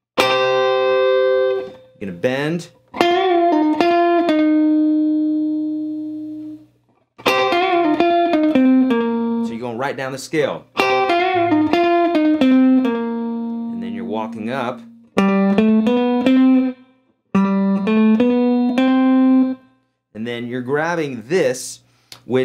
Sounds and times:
Speech: 2.0 - 2.8, 9.4 - 10.7, 13.8 - 14.9, 20.2 - 22.4.

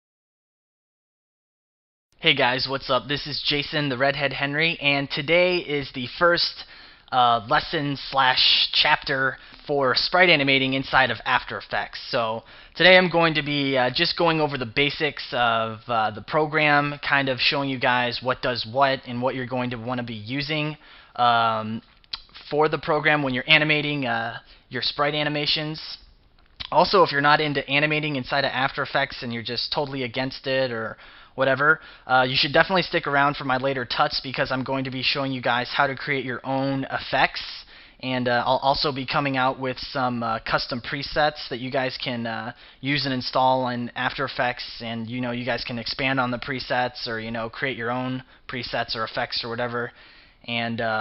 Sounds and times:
Speech: 2.2 - 51.0.

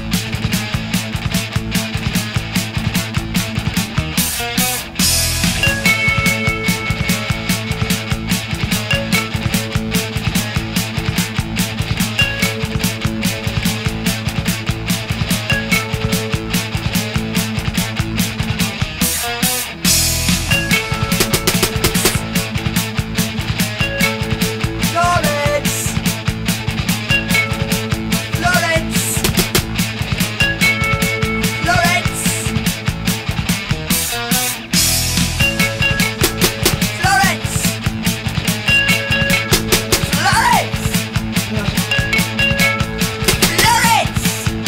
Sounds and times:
Music: 0.0 - 44.6.

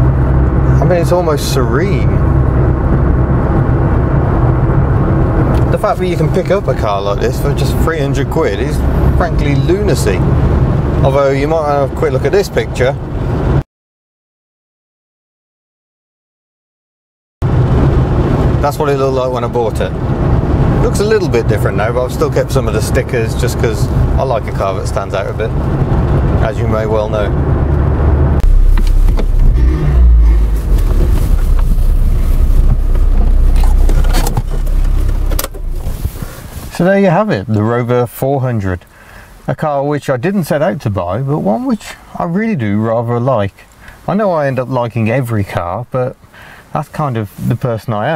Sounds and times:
Car: 0.0 - 13.6, 17.4 - 48.1.

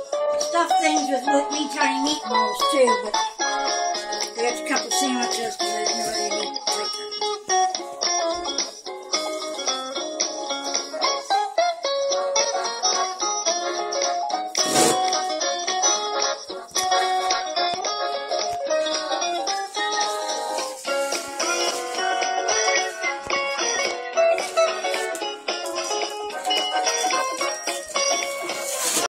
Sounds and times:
Music: 0.0 - 29.0.

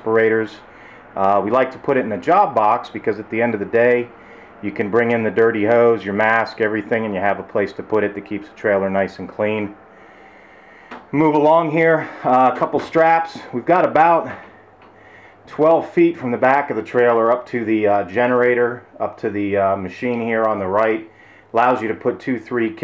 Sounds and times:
Speech: 0.0 - 9.8, 11.1 - 14.5, 15.5 - 22.8.

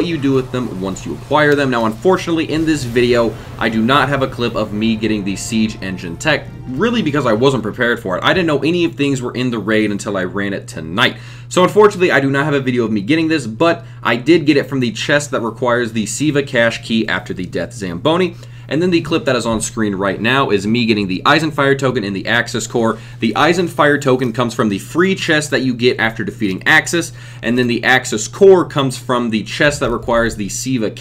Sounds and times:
Speech: 0.0 - 31.0.

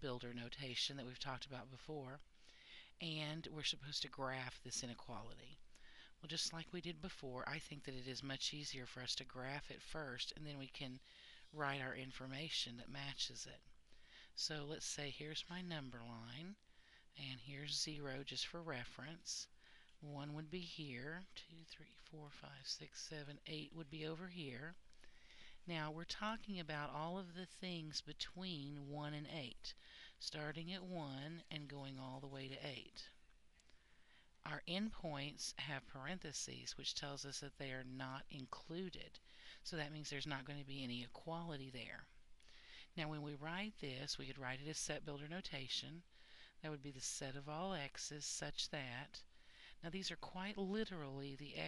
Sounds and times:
Speech: 0.0 - 2.2, 3.0 - 5.6, 6.2 - 13.7, 14.4 - 16.6, 17.2 - 24.8, 25.6 - 33.2, 34.4 - 42.2, 43.0 - 49.2, 49.8 - 51.6.

